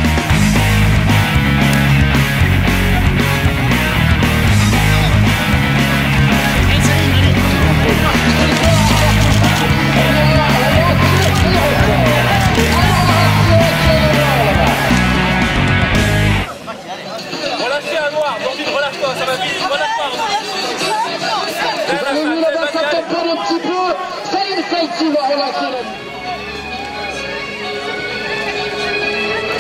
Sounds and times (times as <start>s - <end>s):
Music: 0.0s - 16.5s, 25.9s - 29.6s
Outside, urban or manmade: 0.0s - 29.6s
Male speech, man speaking: 6.6s - 15.0s, 16.5s - 26.0s.